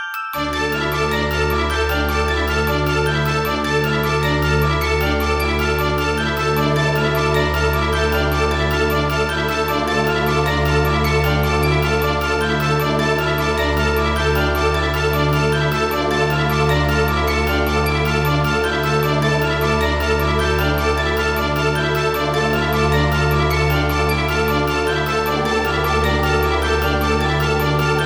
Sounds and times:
Scary music: 0.4s - 28.0s.

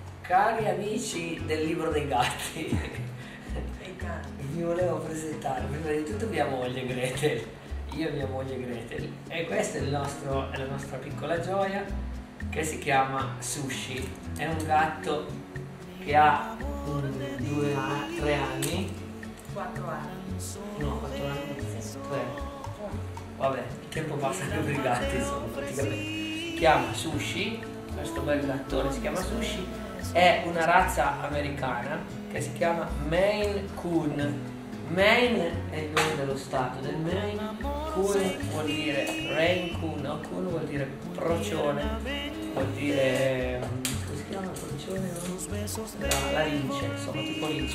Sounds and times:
Music: 0.0s - 47.7s
Speech: 0.3s - 3.0s, 3.8s - 11.9s, 12.5s - 15.4s, 16.0s - 26.0s, 26.6s - 47.7s.

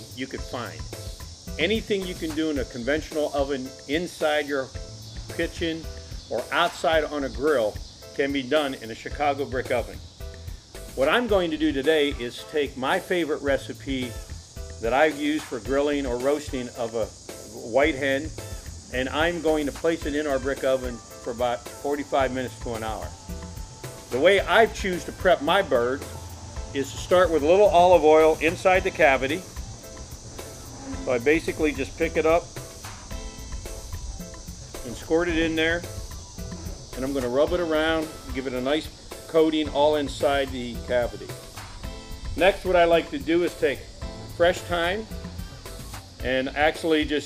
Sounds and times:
Speech: 0.0s - 0.9s, 1.6s - 4.7s, 5.4s - 10.0s, 11.0s - 14.2s, 14.8s - 18.3s, 18.9s - 23.2s, 24.1s - 26.0s, 26.8s - 29.4s, 31.0s - 32.5s, 34.8s - 35.9s, 37.0s - 41.3s, 42.4s - 45.1s, 46.2s - 47.2s
Music: 0.0s - 47.2s.

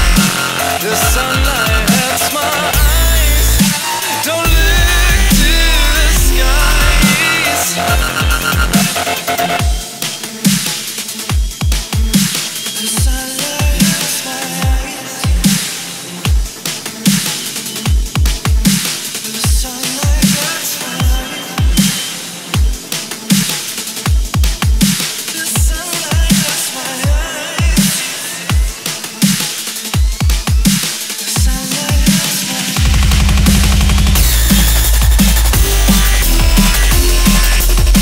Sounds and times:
Dubstep: 0.0s - 38.0s.

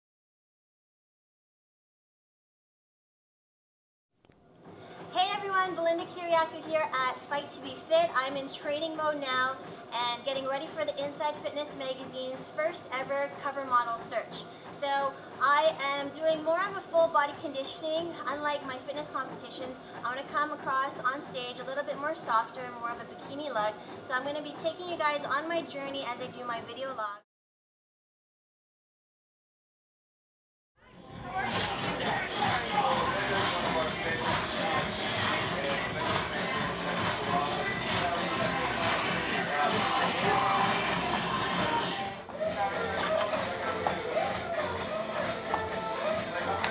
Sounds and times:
Speech: 5.2s - 27.2s.

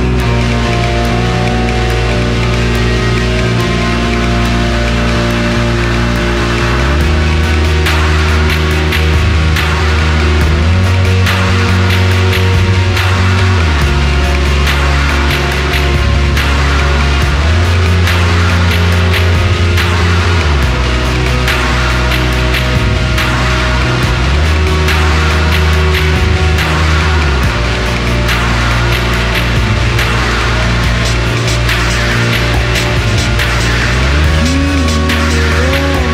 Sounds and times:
Music: 0.0s - 36.1s.

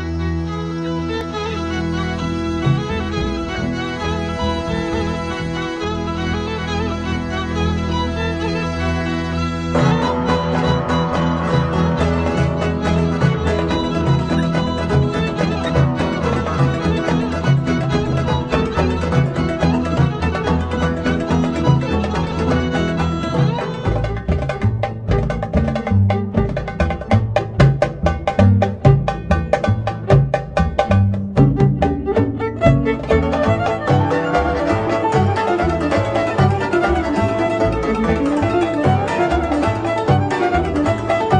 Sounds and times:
Folk music: 0.0s - 41.4s.

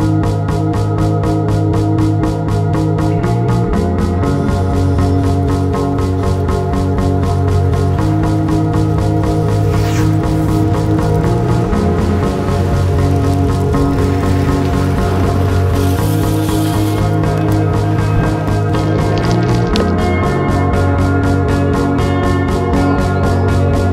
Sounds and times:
Bicycle: 0.0s - 23.9s
Music: 0.0s - 23.9s.

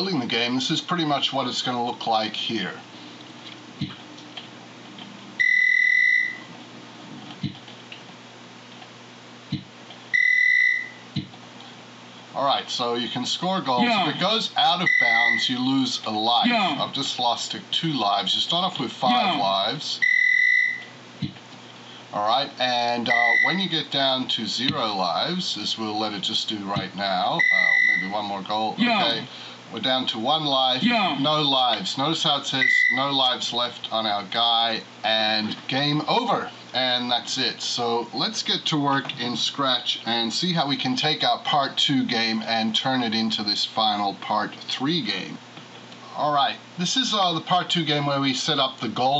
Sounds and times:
Speech: 0.0s - 2.9s, 12.3s - 20.0s, 22.1s - 45.4s, 46.0s - 49.1s.

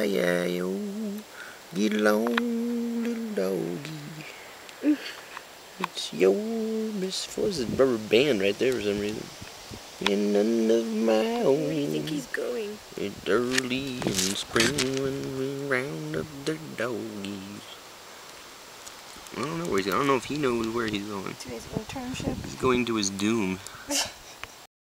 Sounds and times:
Speech: 19.4s - 24.1s.

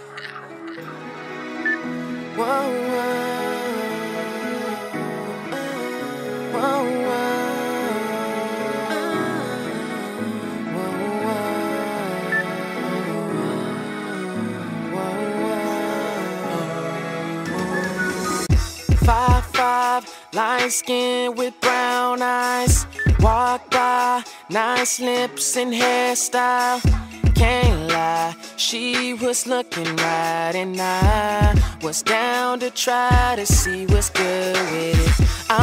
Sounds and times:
Rhythm and blues: 0.0s - 35.6s.

